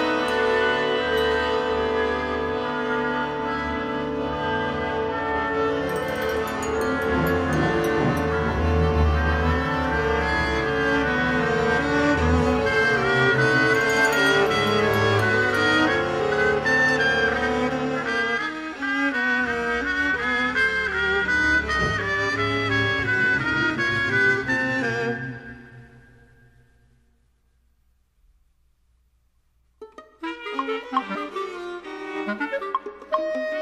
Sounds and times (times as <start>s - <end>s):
Wind instrument, woodwind instrument: 0.0s - 26.6s, 29.9s - 33.6s.